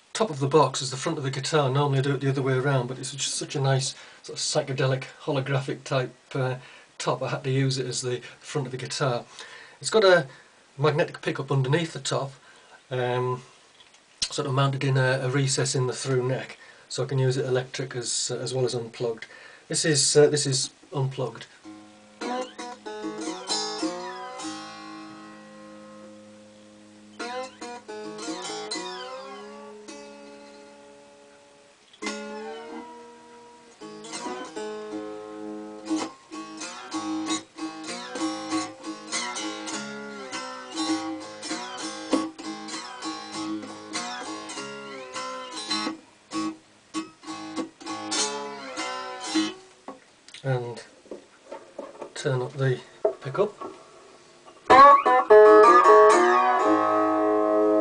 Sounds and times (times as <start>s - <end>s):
Speech: 0.2s - 13.5s, 14.2s - 21.6s, 50.4s - 51.0s, 52.2s - 53.7s.